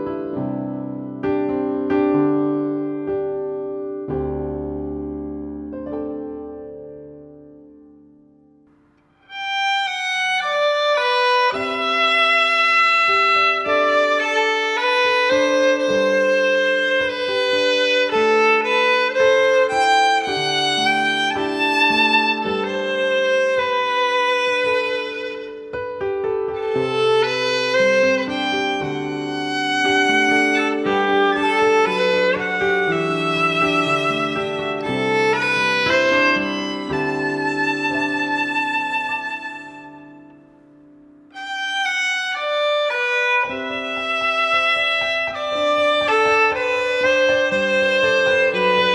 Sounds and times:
Violin, fiddle: 9.2s - 40.4s, 41.3s - 48.9s.

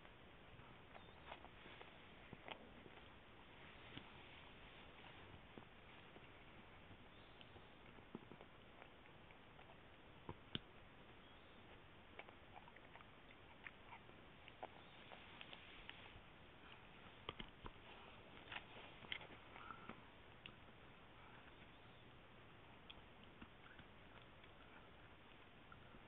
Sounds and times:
Dog: 0.6s - 3.1s, 11.6s - 21.8s, 22.6s - 26.0s.

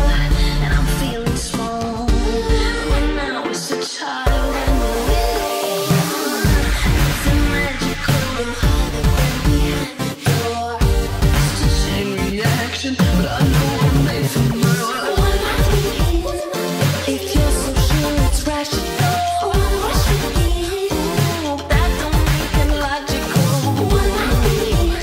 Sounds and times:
Music: 0.0s - 25.0s.

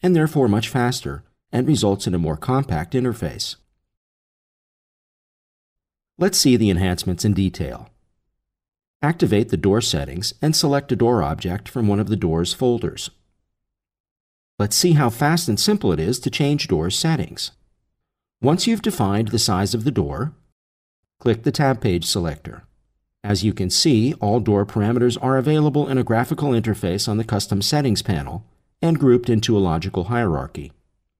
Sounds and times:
Speech: 0.0s - 3.7s, 6.2s - 7.9s, 9.0s - 13.2s, 14.6s - 17.6s, 18.4s - 20.4s, 21.2s - 22.7s, 23.3s - 30.8s.

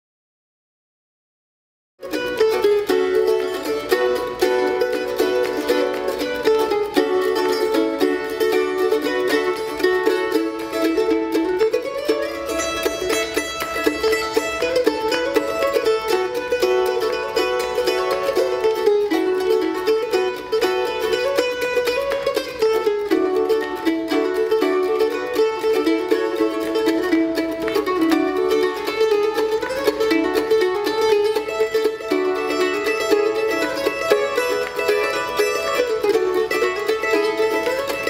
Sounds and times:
Bluegrass: 2.0s - 38.0s
Mandolin: 2.0s - 38.0s
Pizzicato: 2.0s - 38.0s.

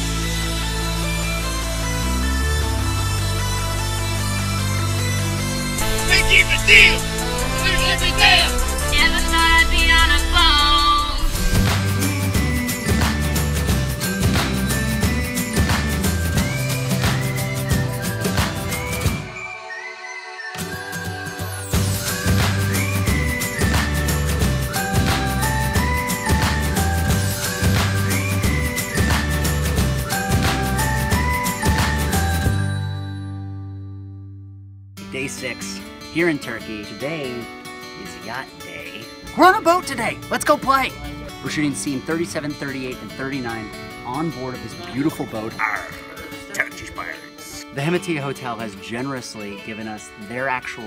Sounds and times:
Music: 0.0s - 50.8s
Speech: 5.9s - 11.0s, 35.1s - 50.8s.

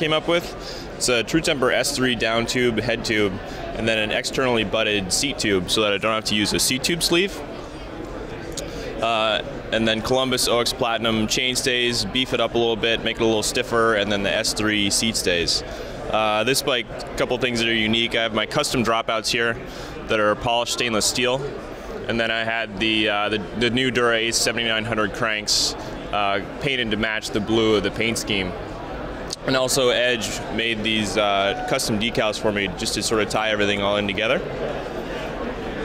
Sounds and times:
Speech: 0.0s - 28.7s, 29.3s - 34.6s.

